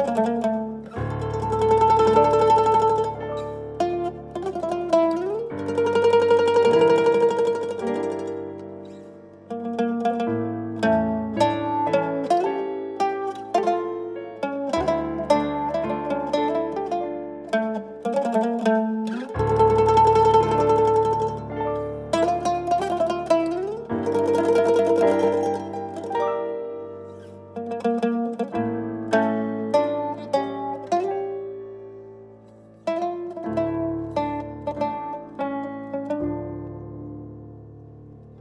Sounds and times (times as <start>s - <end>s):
Mandolin: 0.0s - 38.4s.